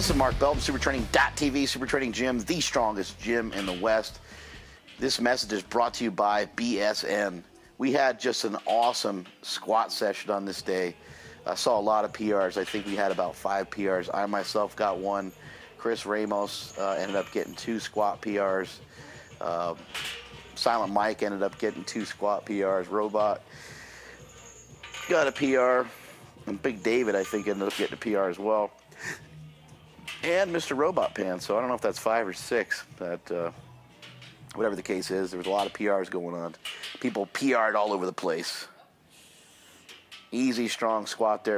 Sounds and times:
Speech: 0:00.0 - 0:04.2, 0:05.0 - 0:18.8, 0:19.4 - 0:19.8, 0:20.6 - 0:23.4, 0:25.1 - 0:28.7, 0:30.2 - 0:33.6, 0:34.5 - 0:38.8, 0:40.4 - 0:41.5.

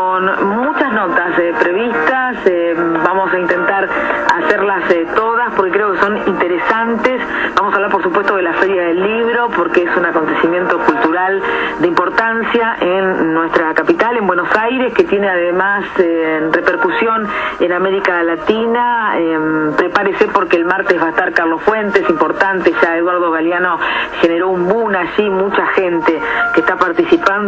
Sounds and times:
Radio: 0:00.0 - 0:27.4
Speech: 0:00.0 - 0:27.4.

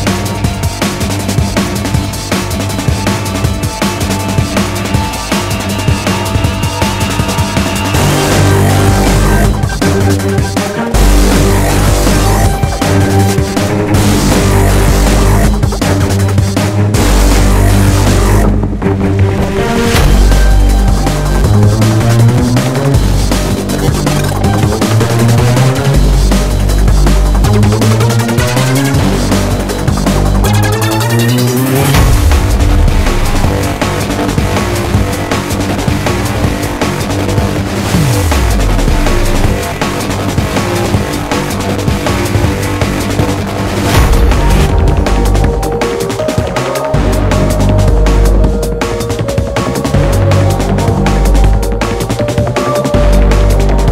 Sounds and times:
Music: 0:00.0 - 0:53.9.

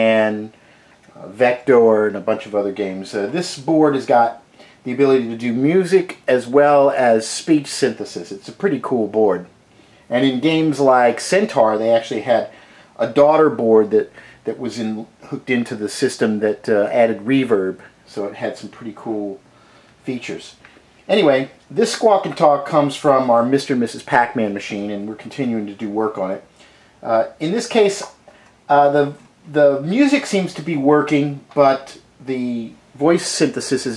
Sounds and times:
Speech: 0:00.0 - 0:09.5, 0:10.1 - 0:19.4, 0:20.0 - 0:33.9.

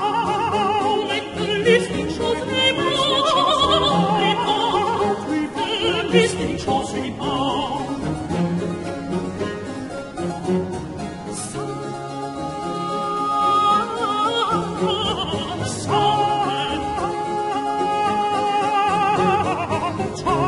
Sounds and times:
Music: 0:00.0 - 0:20.4.

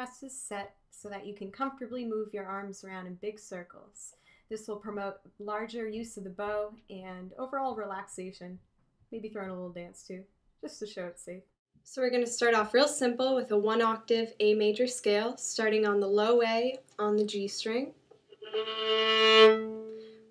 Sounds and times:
Speech: 0:00.0 - 0:08.6, 0:09.2 - 0:18.0.

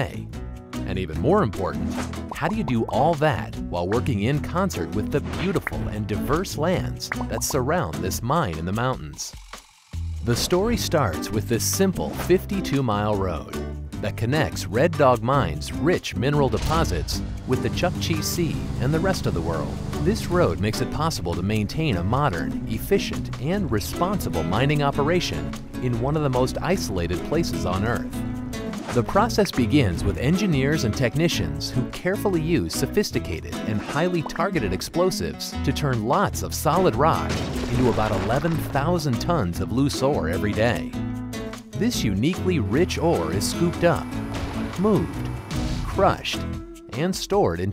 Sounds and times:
Speech: 0:00.0 - 0:09.4, 0:10.2 - 0:28.1, 0:28.9 - 0:41.0, 0:41.8 - 0:44.1, 0:44.8 - 0:45.2, 0:45.9 - 0:47.7
Music: 0:00.0 - 0:47.7.

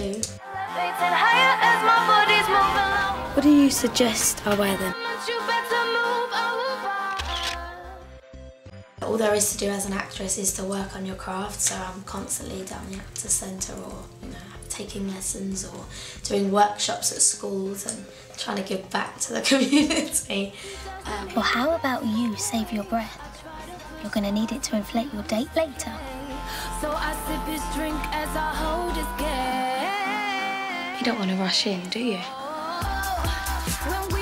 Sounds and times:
Music: 0:00.0 - 0:34.2
Speech: 0:03.4 - 0:05.0, 0:09.0 - 0:23.2, 0:24.0 - 0:26.0, 0:31.0 - 0:32.4.

